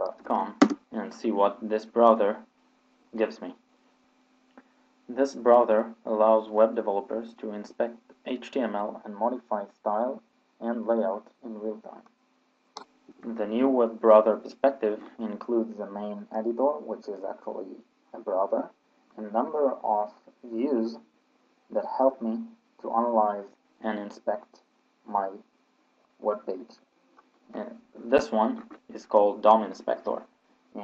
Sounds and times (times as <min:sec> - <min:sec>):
Speech: 0:00.0 - 0:02.4, 0:03.2 - 0:03.6, 0:05.1 - 0:12.0, 0:13.1 - 0:21.0, 0:21.7 - 0:25.4, 0:26.2 - 0:26.8, 0:27.5 - 0:30.8.